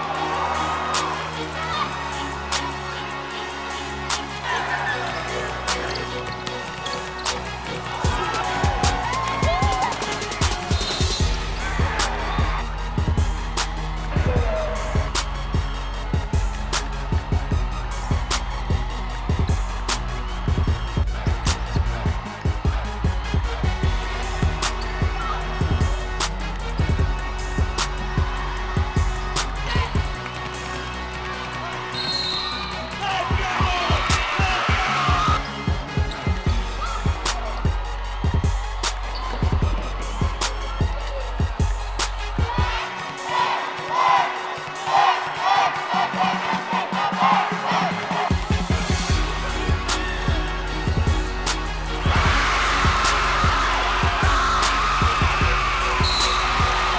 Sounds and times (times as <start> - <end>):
Inside, large room or hall: 0.0 - 56.9
Music: 0.0 - 56.9.